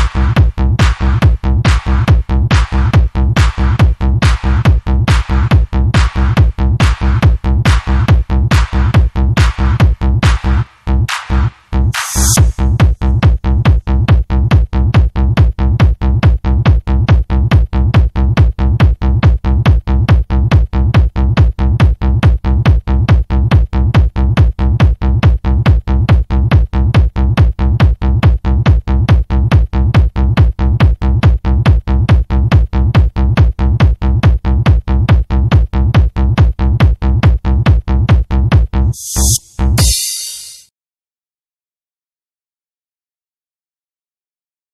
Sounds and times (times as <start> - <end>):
Trance music: 0.0 - 13.1, 38.8 - 40.7.